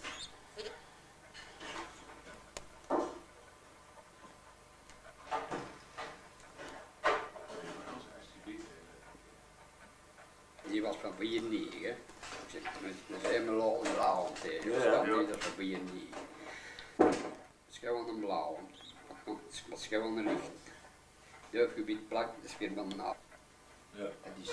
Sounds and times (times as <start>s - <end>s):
Inside, small room: 0.0s - 24.5s.